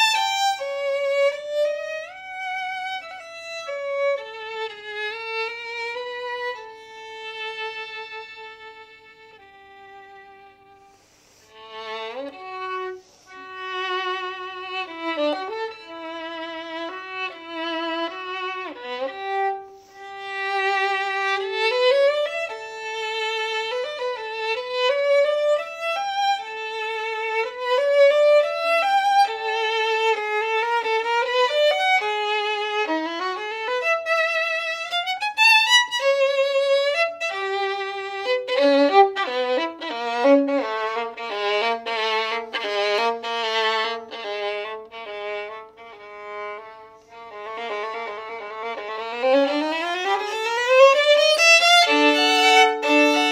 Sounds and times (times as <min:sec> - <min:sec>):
Violin, fiddle: 0:00.0 - 0:53.3.